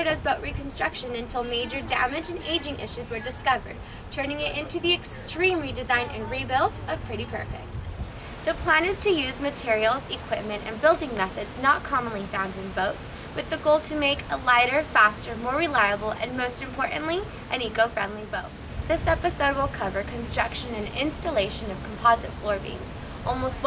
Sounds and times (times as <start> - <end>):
Speech: 0.0 - 7.9, 8.5 - 23.6.